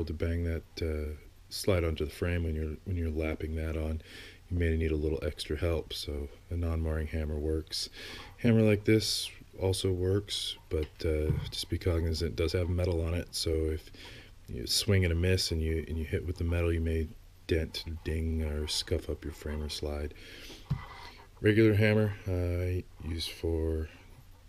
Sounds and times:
Speech: 0:00.0 - 0:13.9, 0:14.5 - 0:20.2, 0:21.4 - 0:24.1.

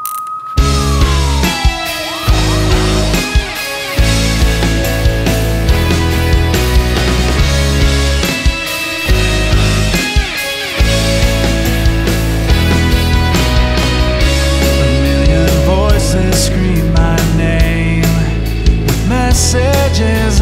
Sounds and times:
Sad music: 0:00.6 - 0:20.4.

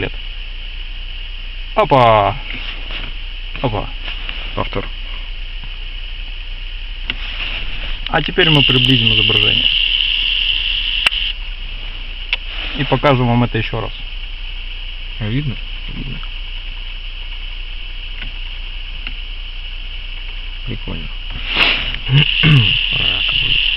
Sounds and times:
Speech: 0:01.8 - 0:02.6, 0:03.6 - 0:04.0, 0:04.6 - 0:04.9, 0:08.1 - 0:09.7, 0:12.8 - 0:14.1, 0:15.2 - 0:16.2, 0:20.6 - 0:21.2, 0:22.1 - 0:23.6.

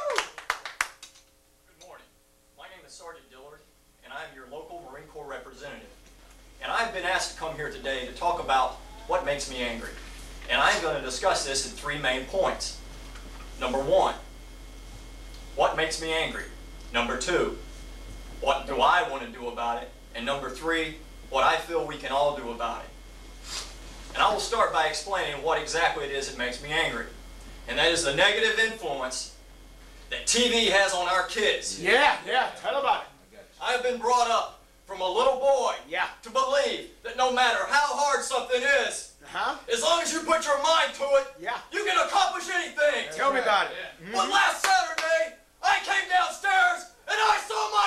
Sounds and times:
Male speech, man speaking: 0:01.7 - 0:06.0, 0:06.6 - 0:12.8, 0:13.6 - 0:14.3, 0:15.6 - 0:17.6, 0:18.4 - 0:23.0, 0:24.1 - 0:27.1, 0:27.7 - 0:29.4, 0:30.1 - 0:47.8.

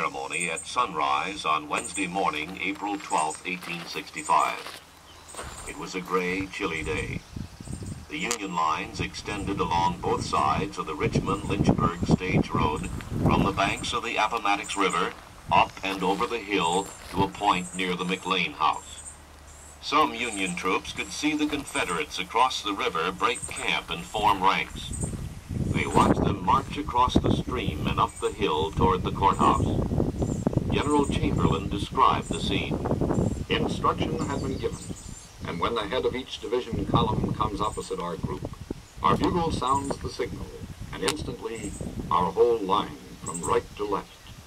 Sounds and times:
Speech: 0:00.0 - 0:04.8, 0:05.6 - 0:07.2, 0:08.1 - 0:19.0, 0:19.8 - 0:25.0, 0:25.7 - 0:29.8, 0:30.7 - 0:32.8, 0:33.5 - 0:44.3.

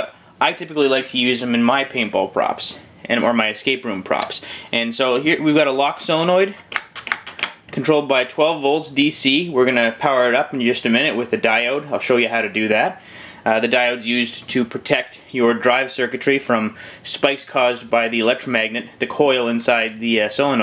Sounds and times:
Speech: 0:00.0 - 0:06.6, 0:07.7 - 0:20.6.

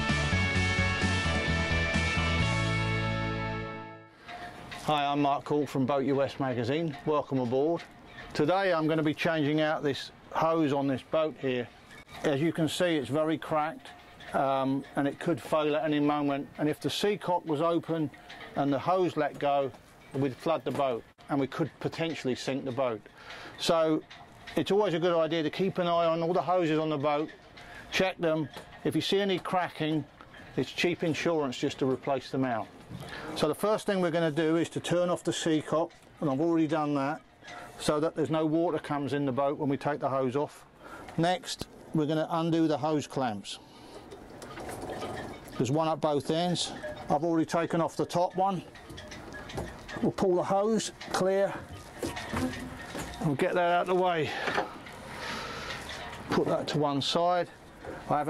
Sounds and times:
Speech: 0:04.8 - 0:23.0, 0:23.6 - 0:27.3, 0:27.9 - 0:32.7, 0:33.4 - 0:37.2, 0:37.8 - 0:40.6, 0:41.2 - 0:43.6, 0:45.6 - 0:48.7, 0:50.0 - 0:51.7, 0:53.2 - 0:54.5, 0:56.3 - 0:58.3.

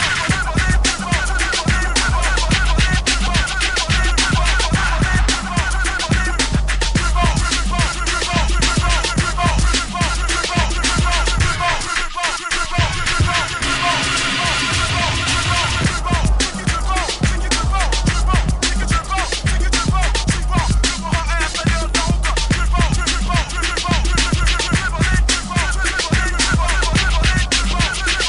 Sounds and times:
Music: 0:00.0 - 0:28.2.

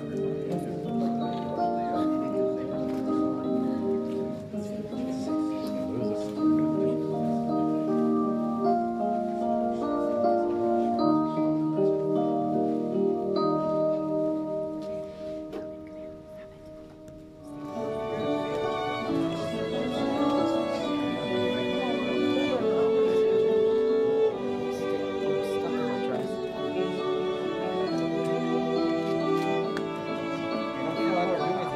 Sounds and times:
Wedding music: 0:00.0 - 0:31.7.

